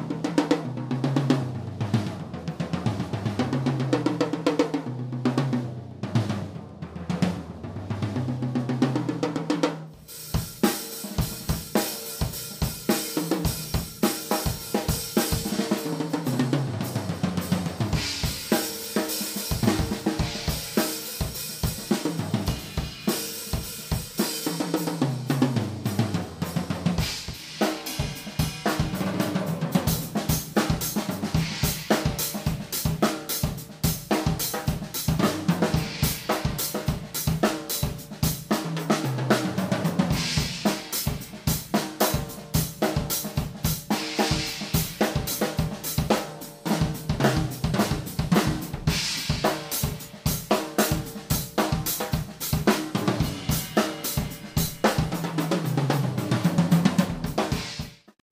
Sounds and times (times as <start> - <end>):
Drum kit: 0.0 - 58.3
Snare drum: 6.1 - 58.2
Bass drum: 25.9 - 33.0, 50.9 - 55.3.